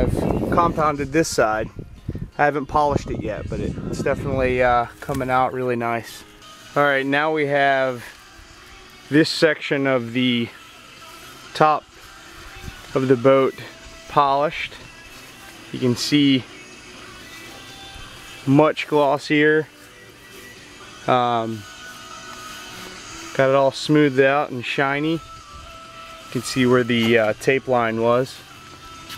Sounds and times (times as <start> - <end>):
Speech: 0.0 - 1.7, 2.4 - 6.2, 6.8 - 8.1, 9.1 - 10.6, 13.0 - 14.8, 15.8 - 16.5, 18.5 - 19.7, 21.1 - 21.6, 23.4 - 25.2, 26.4 - 28.4
Music: 0.0 - 29.1.